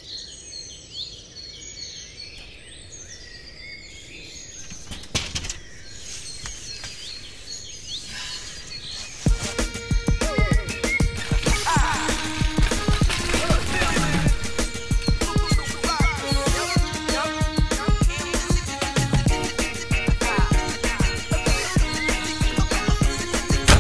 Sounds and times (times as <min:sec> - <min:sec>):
Chirp, tweet: 0:00.0 - 0:11.2.